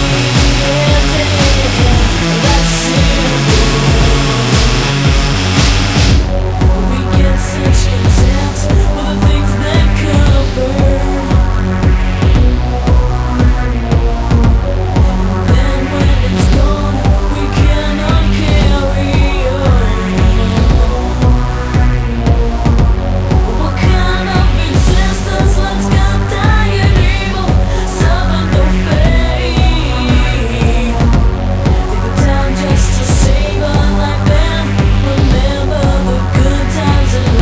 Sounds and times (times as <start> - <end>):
Singing: 0.0 - 5.6, 6.8 - 11.7, 15.4 - 21.6, 23.5 - 37.4
Music: 0.0 - 37.4.